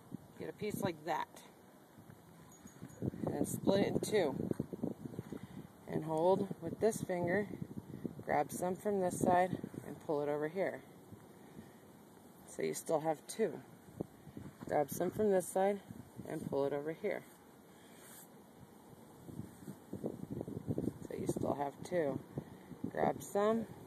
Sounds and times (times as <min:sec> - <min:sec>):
Speech: 0:00.4 - 0:01.5, 0:03.3 - 0:04.4, 0:05.9 - 0:07.5, 0:08.3 - 0:10.8, 0:12.5 - 0:13.7, 0:14.7 - 0:17.3, 0:21.1 - 0:22.2, 0:22.9 - 0:23.7.